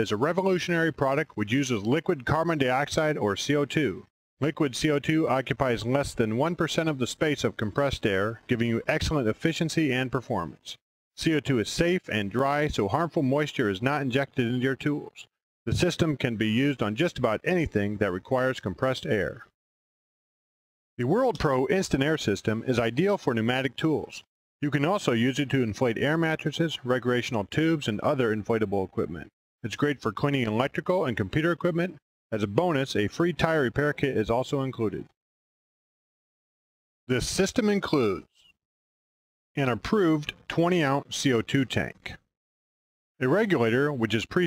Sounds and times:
Speech: 0:00.0 - 0:19.5, 0:21.0 - 0:35.2, 0:37.1 - 0:38.4, 0:39.6 - 0:42.3, 0:43.2 - 0:44.4.

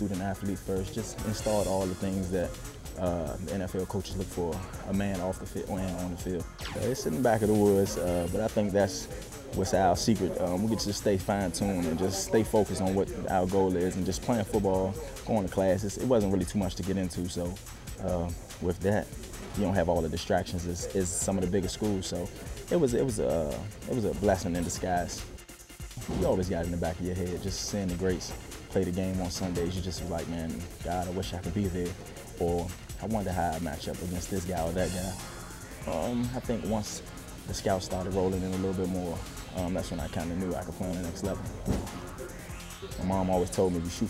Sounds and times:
Speech: 0:00.0 - 0:25.3, 0:26.0 - 0:35.2, 0:35.9 - 0:41.9, 0:43.0 - 0:44.0
Music: 0:00.0 - 0:44.0.

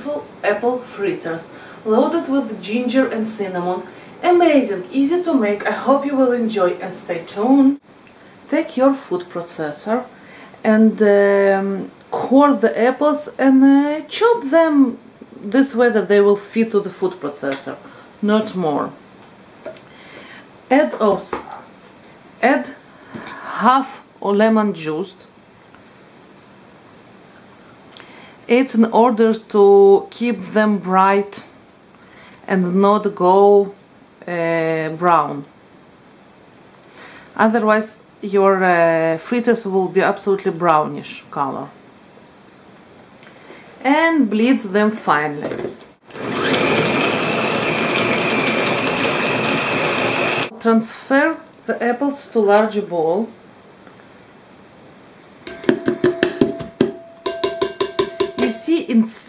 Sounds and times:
Speech: 0:00.0 - 0:07.8, 0:08.5 - 0:19.0, 0:20.7 - 0:21.7, 0:22.4 - 0:22.8, 0:23.4 - 0:25.3, 0:28.5 - 0:31.5, 0:32.5 - 0:35.5, 0:37.4 - 0:41.8, 0:43.8 - 0:45.7, 0:50.5 - 0:53.4, 0:58.4 - 0:59.2
Inside, small room: 0:00.0 - 0:59.2.

